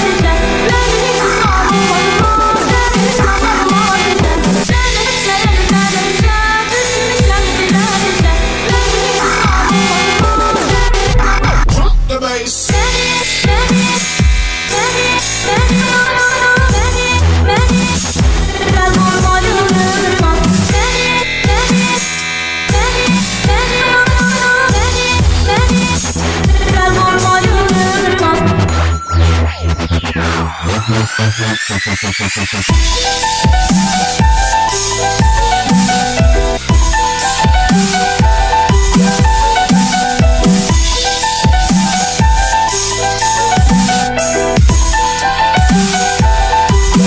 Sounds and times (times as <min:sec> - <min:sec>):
Dubstep: 0:00.0 - 0:47.0.